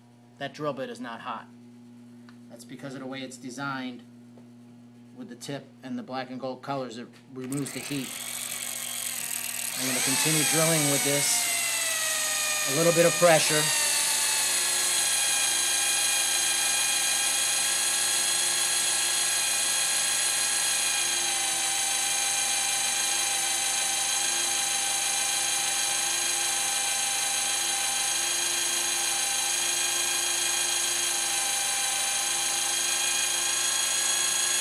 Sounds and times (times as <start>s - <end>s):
Drill: 7.4s - 34.6s.